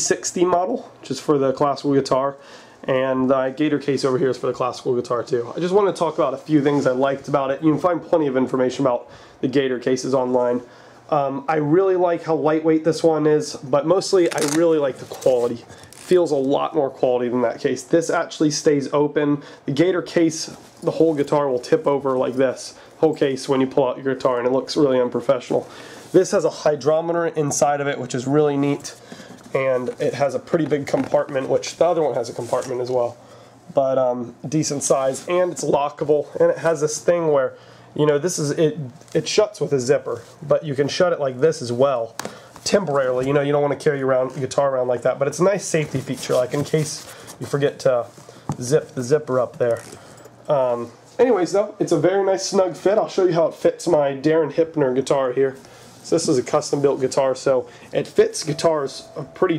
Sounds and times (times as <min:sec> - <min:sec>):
Speech: 0:00.0 - 0:59.5.